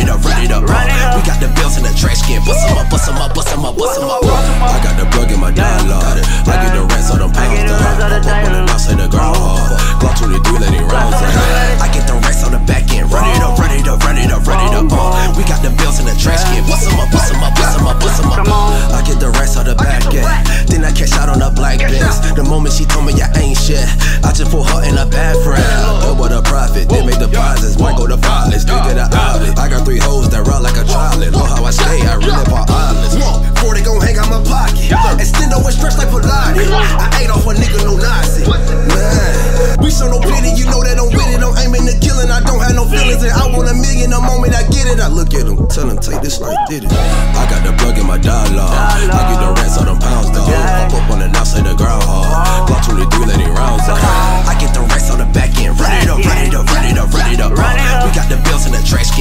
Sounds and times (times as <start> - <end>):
Music: 0.0 - 59.2.